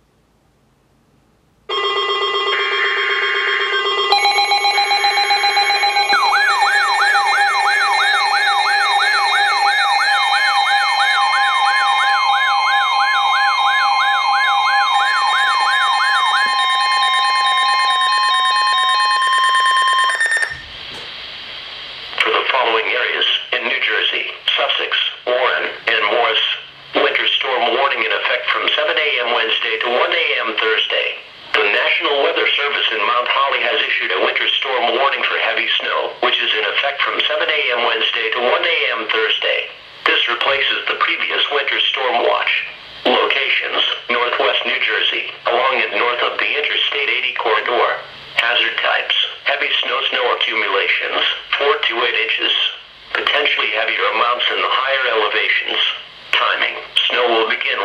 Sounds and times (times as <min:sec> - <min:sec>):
Speech: 0:22.2 - 0:57.8.